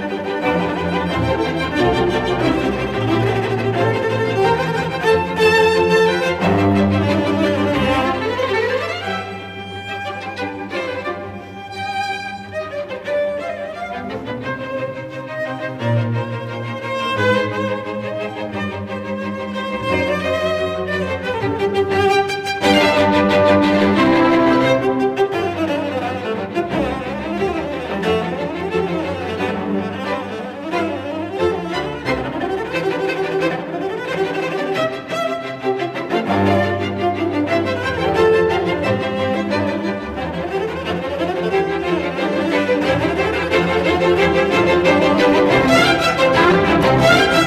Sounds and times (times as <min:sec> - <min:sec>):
Cello: 0:00.0 - 0:47.4
Orchestra: 0:00.0 - 0:47.4
Violin, fiddle: 0:00.0 - 0:47.4.